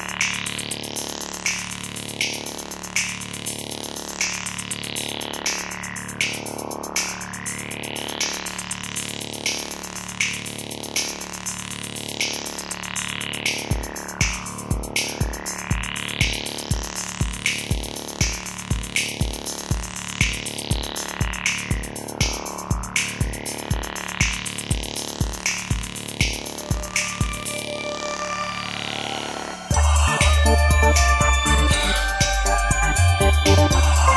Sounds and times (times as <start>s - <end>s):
Drum machine: 9.5s - 27.6s, 29.7s - 34.1s.